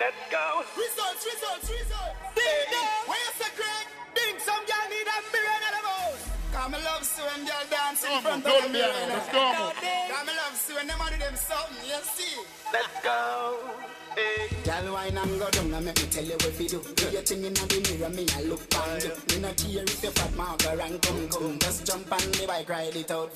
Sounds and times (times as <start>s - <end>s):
Speech: 0.0s - 12.4s
Music: 0.0s - 23.3s.